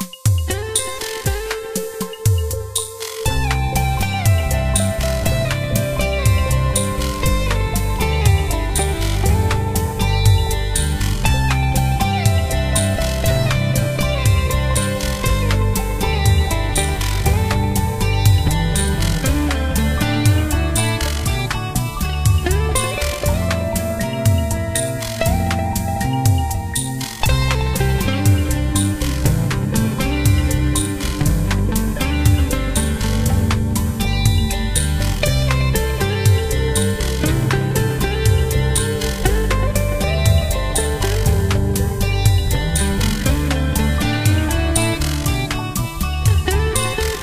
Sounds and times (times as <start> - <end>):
Electric guitar: 0.0 - 47.2
Strum: 0.5 - 47.2.